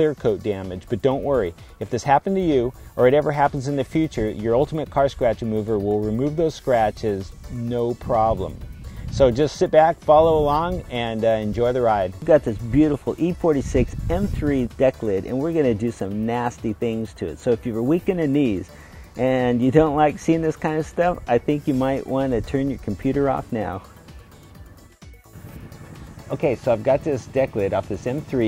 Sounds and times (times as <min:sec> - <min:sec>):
Speech: 0:00.0 - 0:08.5, 0:09.2 - 0:23.8, 0:26.3 - 0:28.4
Music: 0:00.0 - 0:28.4.